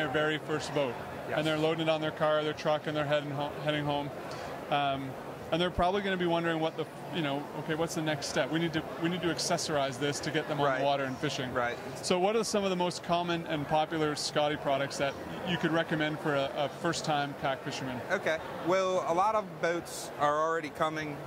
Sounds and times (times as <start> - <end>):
Speech: 4.7 - 21.2.